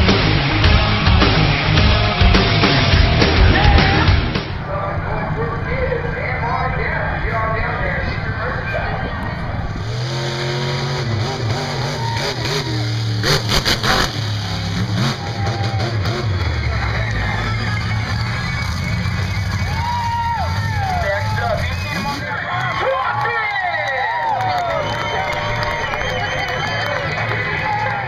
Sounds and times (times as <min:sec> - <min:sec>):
Speech: 0:04.6 - 0:09.7, 0:20.9 - 0:24.9.